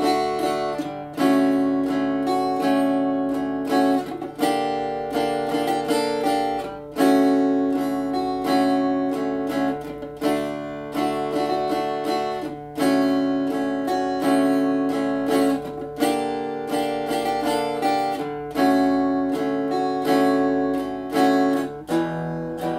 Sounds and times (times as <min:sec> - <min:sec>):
Electric guitar: 0:00.0 - 0:22.7.